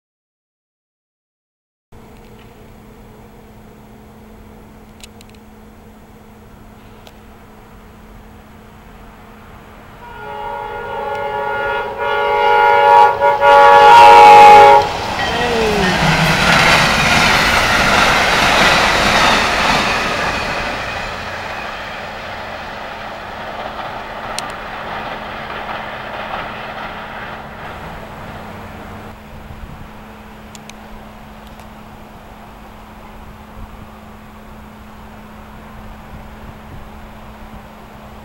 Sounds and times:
Railroad car, train wagon: 2.0s - 38.2s
Train horn: 10.0s - 16.4s
Clickety-clack: 14.8s - 28.5s.

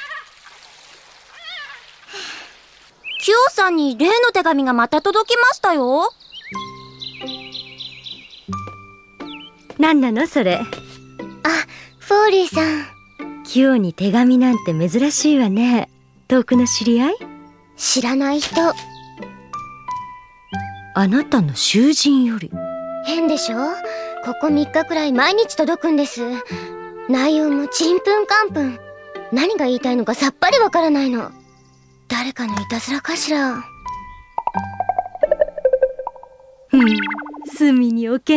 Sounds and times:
Speech: 3.2s - 6.1s, 9.8s - 10.7s, 13.5s - 17.2s, 17.8s - 18.8s, 21.0s - 26.4s, 37.5s - 38.3s
Music: 6.4s - 35.5s.

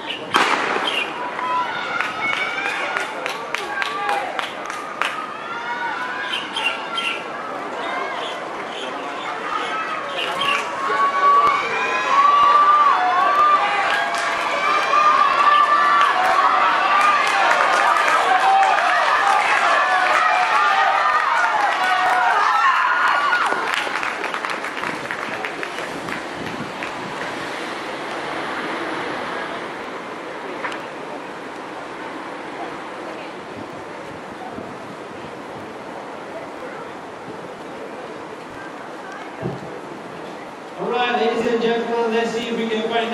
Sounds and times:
Outside, urban or manmade: 0.0s - 43.1s.

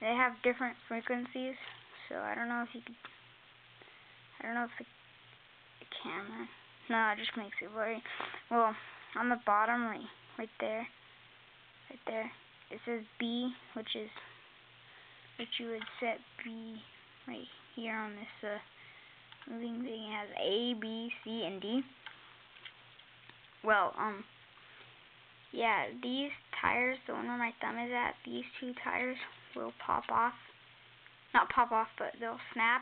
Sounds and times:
Speech: 0.0s - 3.1s, 4.4s - 4.9s, 5.8s - 11.0s, 11.9s - 14.3s, 15.4s - 18.7s, 19.4s - 22.0s, 23.6s - 24.3s, 25.5s - 30.5s, 31.3s - 32.8s.

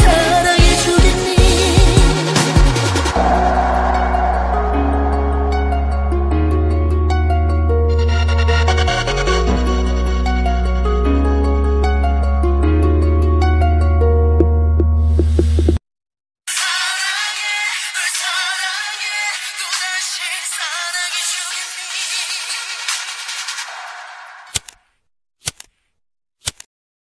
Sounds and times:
Music: 0.0s - 15.8s, 16.5s - 24.2s.

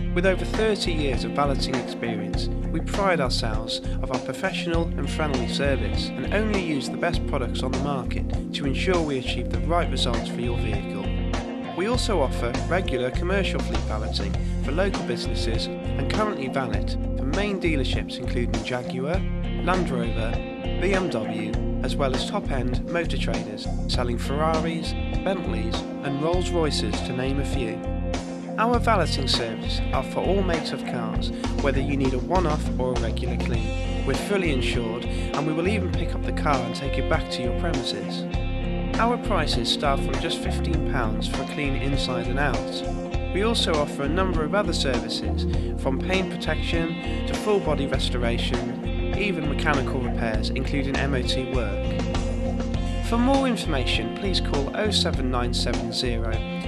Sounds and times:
Music: 0.0s - 56.6s
Speech: 0.1s - 27.8s, 28.6s - 38.3s, 39.0s - 51.9s, 52.9s - 56.5s.

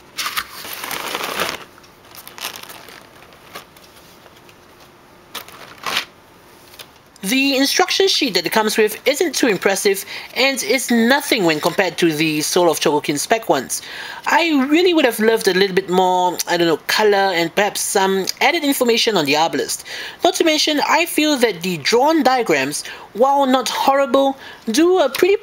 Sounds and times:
Speech: 7.2s - 25.4s.

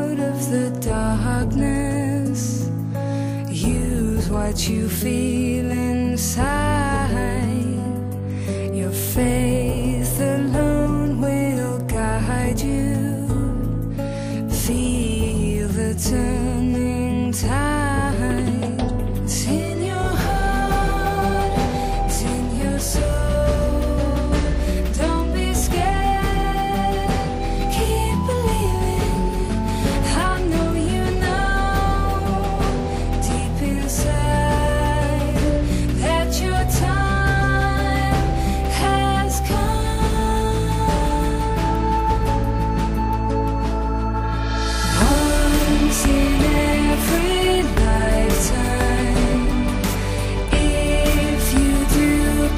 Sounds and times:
Music: 0.0s - 52.5s.

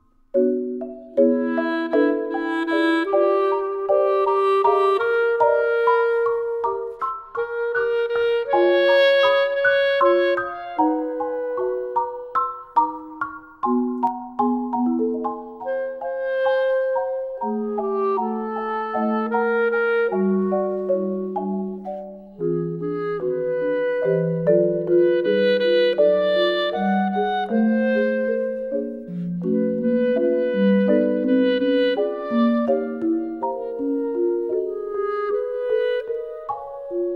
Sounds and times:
Marimba, xylophone: 0.0s - 37.1s.

